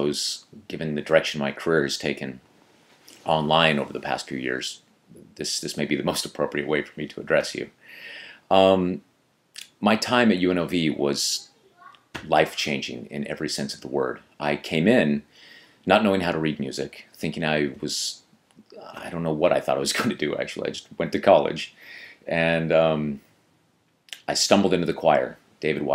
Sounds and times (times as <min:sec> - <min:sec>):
Speech: 0:00.0 - 0:02.4, 0:03.2 - 0:07.7, 0:08.5 - 0:09.0, 0:09.6 - 0:15.3, 0:15.9 - 0:23.2, 0:24.1 - 0:25.9.